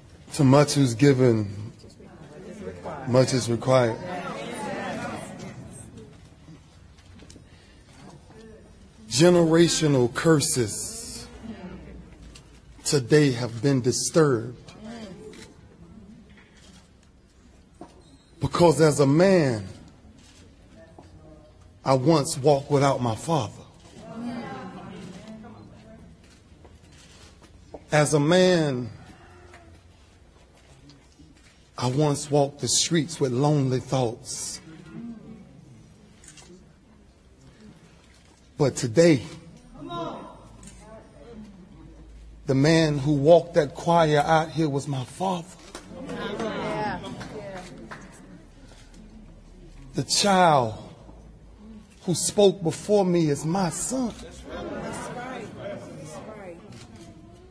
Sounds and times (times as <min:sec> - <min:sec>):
Narration, monologue: 0:00.0 - 0:35.2, 0:35.9 - 0:57.1
Male speech, man speaking: 0:00.3 - 0:05.5, 0:08.4 - 0:11.4, 0:12.8 - 0:15.1, 0:18.4 - 0:19.9, 0:21.8 - 0:25.7, 0:27.9 - 0:29.0, 0:31.8 - 0:34.8, 0:38.6 - 0:40.4, 0:42.4 - 0:47.0, 0:49.9 - 0:51.0, 0:52.0 - 0:56.3.